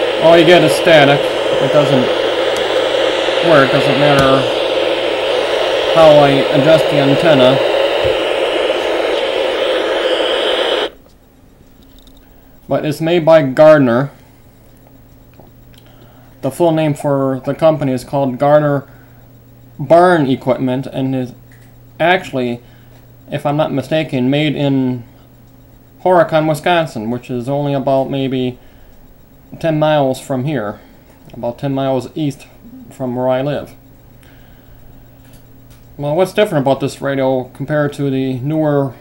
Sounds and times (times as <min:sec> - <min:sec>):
Radio: 0:00.0 - 0:11.0
Speech: 0:00.2 - 0:02.2, 0:03.4 - 0:04.6, 0:05.9 - 0:07.7, 0:12.7 - 0:14.2, 0:16.4 - 0:18.9, 0:19.8 - 0:21.4, 0:22.0 - 0:22.6, 0:23.3 - 0:25.1, 0:26.0 - 0:28.6, 0:29.5 - 0:33.8, 0:36.0 - 0:39.0.